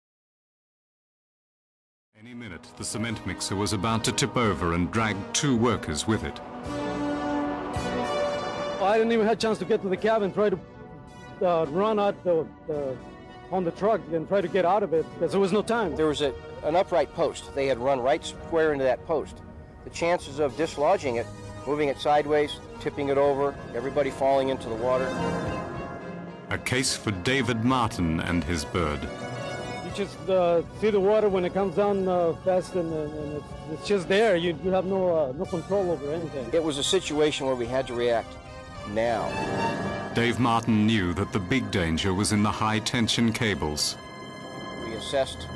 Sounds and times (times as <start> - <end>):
Speech: 2.2 - 6.4, 8.8 - 10.6, 11.4 - 19.3, 26.5 - 29.1, 30.0 - 38.3, 40.2 - 44.0
Music: 2.2 - 45.5.